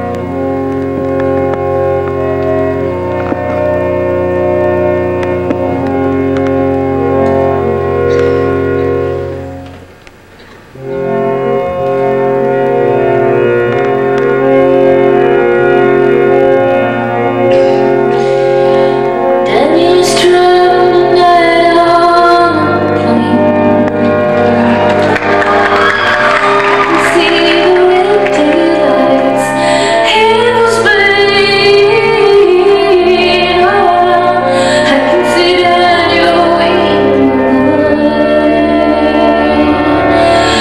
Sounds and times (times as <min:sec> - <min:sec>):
Inside, large room or hall: 0:00.0 - 0:40.6
Music: 0:00.0 - 0:40.6.